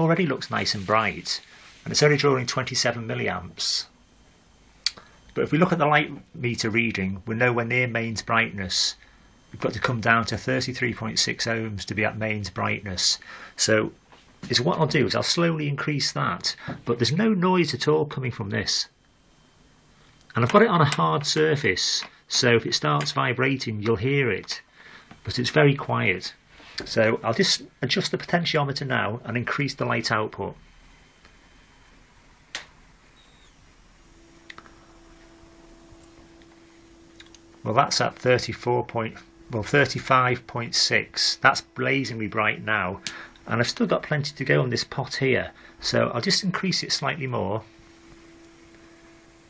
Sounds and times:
Speech: 0.0 - 4.0, 4.9 - 19.0, 20.3 - 30.6, 37.6 - 47.7
Inside, small room: 0.0 - 49.4.

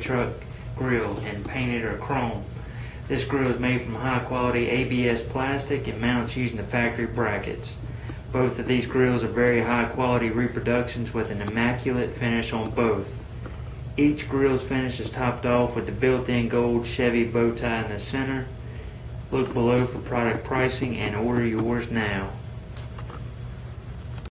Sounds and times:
Speech: 0.0 - 2.5, 3.1 - 13.2, 14.0 - 18.6, 19.3 - 22.4.

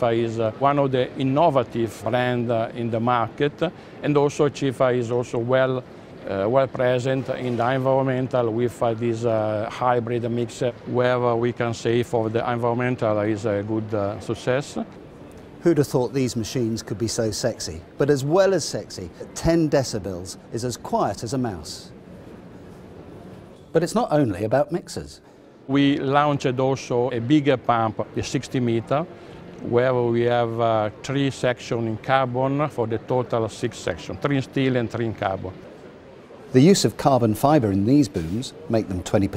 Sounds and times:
Speech: 0.0 - 15.0, 15.6 - 21.9, 23.7 - 35.6, 36.5 - 39.3.

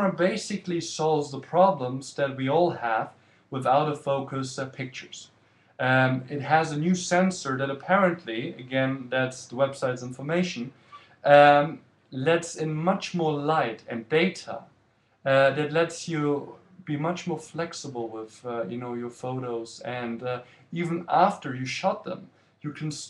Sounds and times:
Speech: 0.0 - 23.0.

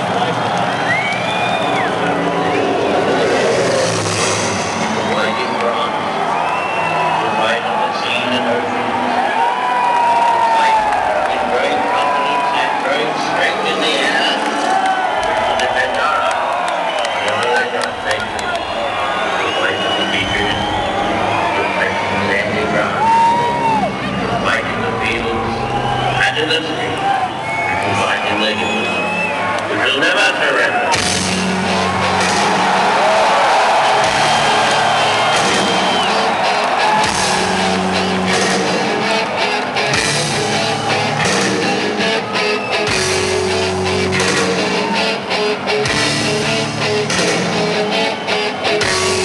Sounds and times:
Music: 0.0 - 49.2
Male speech, man speaking: 5.0 - 5.9, 7.2 - 8.7, 10.5 - 14.4, 15.6 - 16.4, 17.2 - 18.7, 19.3 - 20.7, 21.5 - 23.1, 24.4 - 25.6, 26.2 - 27.0, 27.8 - 28.9, 29.7 - 30.9.

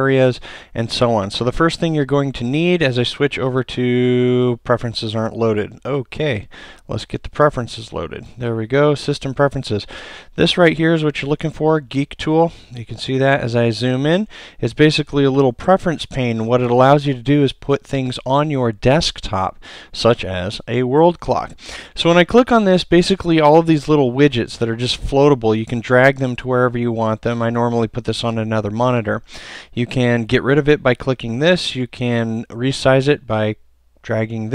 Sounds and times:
Speech: 0.0 - 34.5.

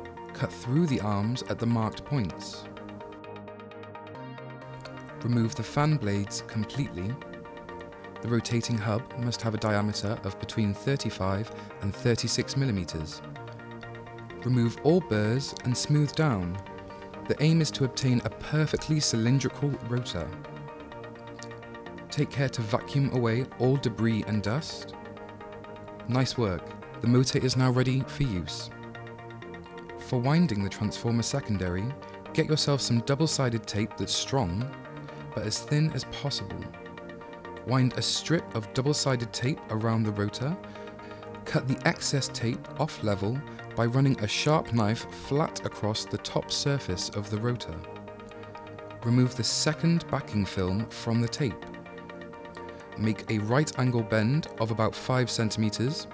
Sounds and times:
Music: 0.0 - 56.1
Speech: 0.4 - 2.7, 5.2 - 7.2, 8.2 - 13.2, 14.4 - 16.6, 17.3 - 20.4, 22.1 - 24.9, 26.1 - 28.7, 30.0 - 34.7, 35.4 - 36.7, 37.7 - 40.6, 41.4 - 47.8, 49.0 - 51.6, 53.0 - 56.1.

